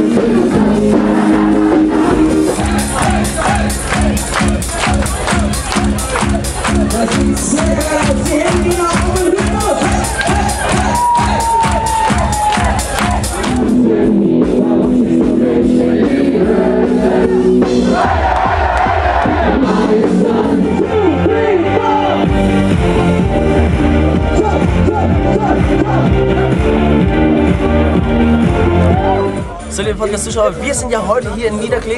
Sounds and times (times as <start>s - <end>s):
Music: 0.0s - 31.9s
Male speech, man speaking: 6.9s - 10.0s, 29.7s - 31.9s.